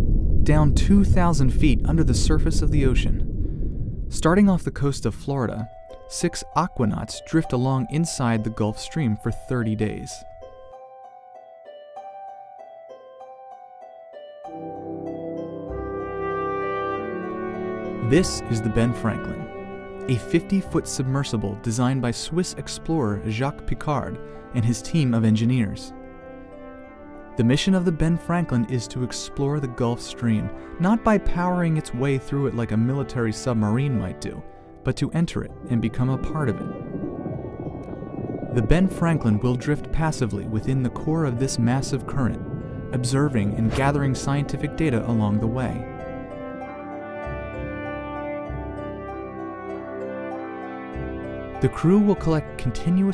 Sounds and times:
Speech: 0.5 - 3.3, 4.1 - 10.2, 18.0 - 19.5, 20.1 - 25.9, 27.4 - 36.8, 38.6 - 45.9, 51.6 - 53.1
Music: 4.6 - 53.1.

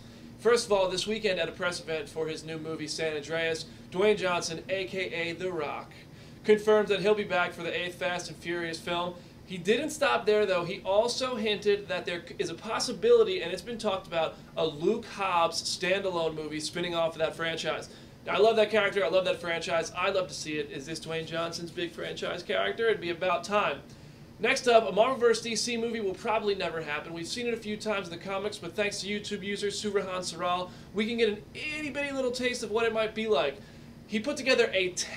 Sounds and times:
Speech: 0.4 - 35.1.

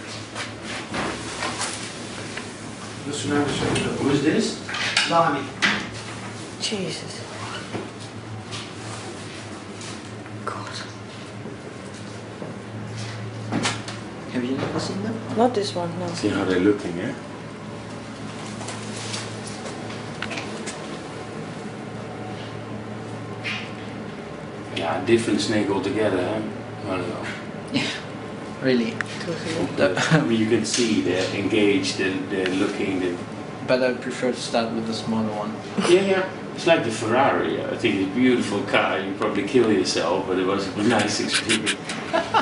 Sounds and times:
Speech: 28.6 - 41.8.

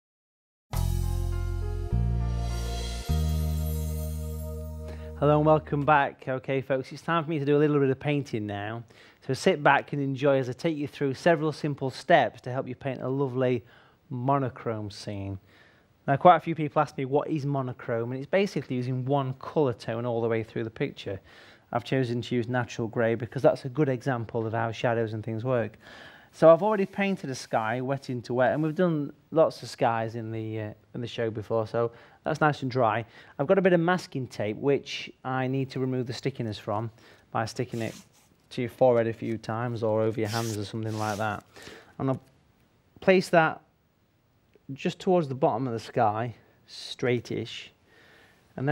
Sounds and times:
Speech: 5.2 - 15.4, 16.0 - 25.8, 26.4 - 42.3, 43.0 - 43.7, 44.6 - 47.8.

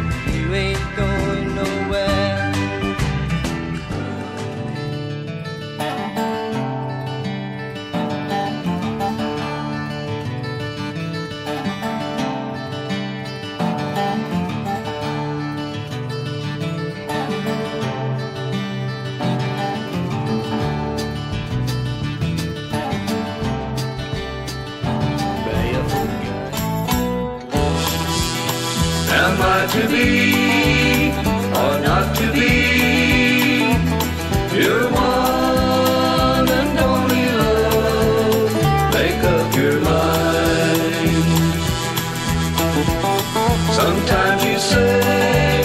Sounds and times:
Rock music: 0.0 - 7.0, 16.1 - 45.6
Country: 0.0 - 45.6.

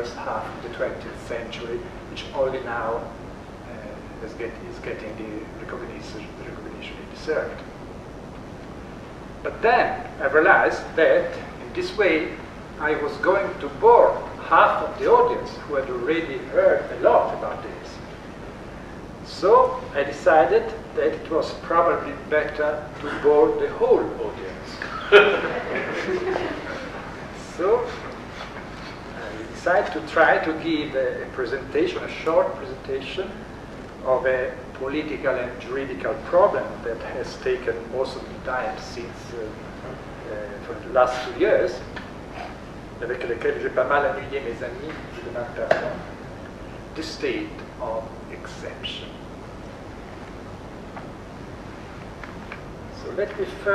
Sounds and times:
Speech: 0.0 - 7.7, 9.5 - 18.1, 19.2 - 28.2, 29.1 - 33.4, 34.0 - 46.1, 47.0 - 49.2, 52.9 - 53.7
Inside, small room: 0.0 - 53.7.

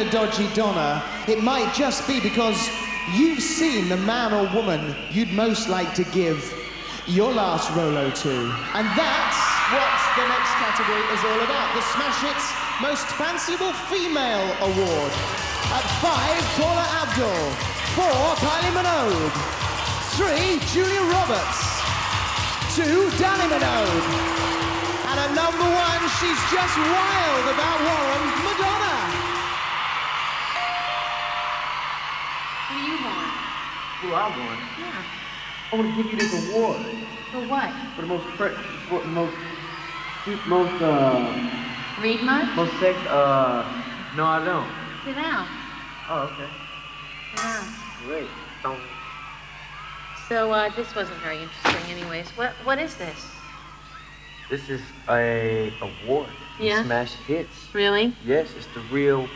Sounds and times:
Music: 0.0 - 59.3.

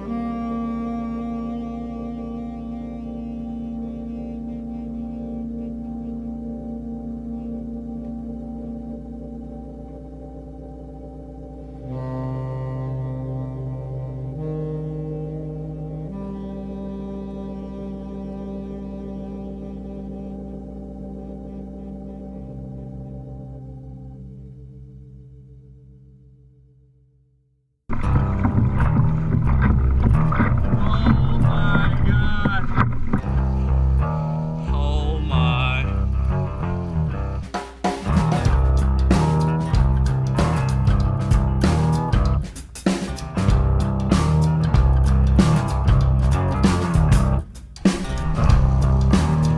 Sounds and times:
Music: 0.0 - 49.5.

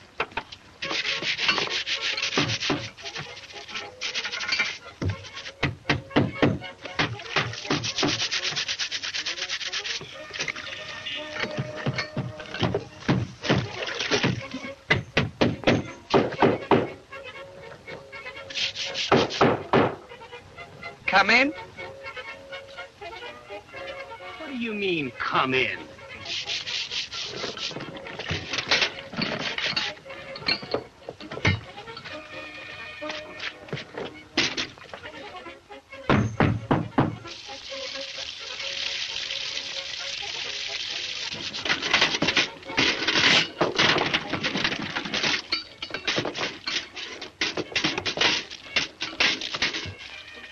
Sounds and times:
Music: 0.0 - 50.5
Speech: 21.1 - 21.6, 24.4 - 25.9.

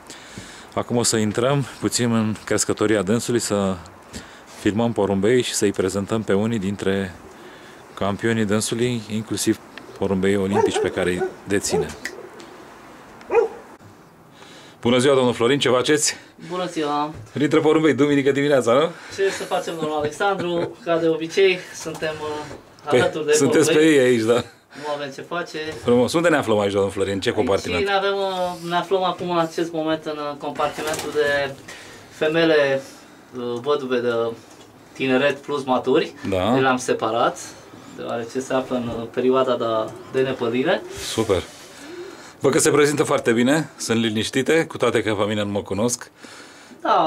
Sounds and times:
Speech: 0.8 - 3.9, 4.6 - 7.2, 8.0 - 12.0, 14.8 - 31.6, 32.2 - 34.4, 35.0 - 41.5, 42.4 - 46.1, 46.8 - 47.0.

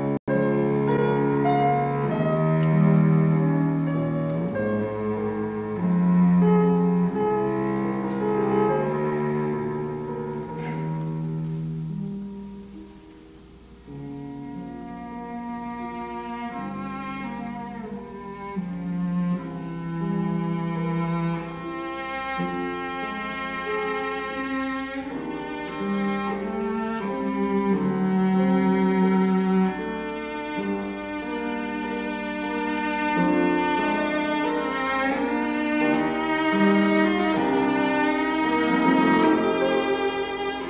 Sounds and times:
Cello: 0.0 - 40.6.

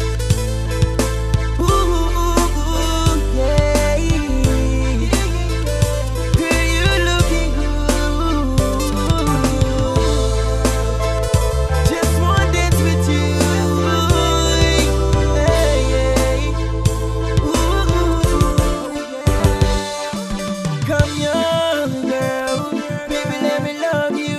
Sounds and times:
Independent music: 0.0 - 24.3.

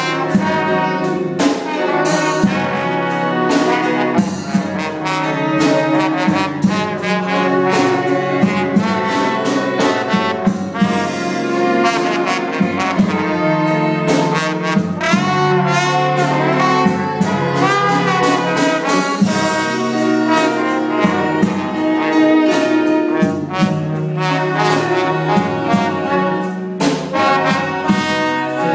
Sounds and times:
Orchestra: 0.0 - 28.7.

